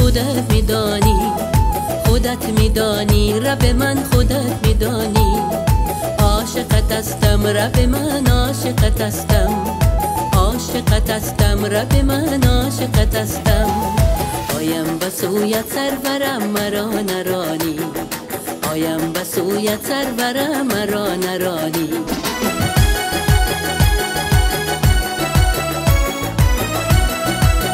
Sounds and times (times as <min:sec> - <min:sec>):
Gospel music: 0:00.0 - 0:27.7.